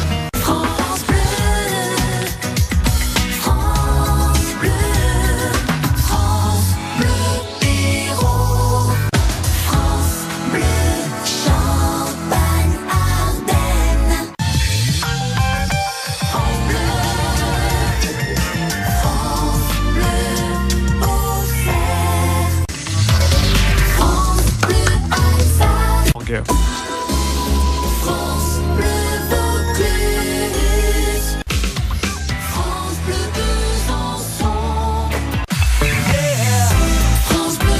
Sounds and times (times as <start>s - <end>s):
Music: 0.0s - 37.7s.